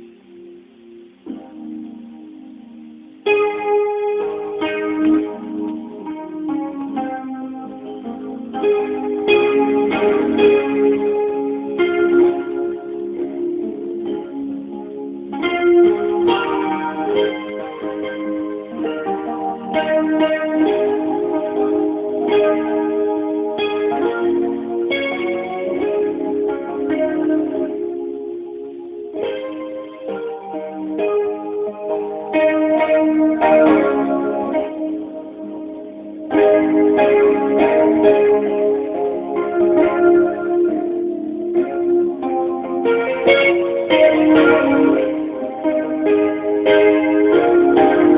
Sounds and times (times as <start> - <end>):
Piano: 0.0 - 48.1.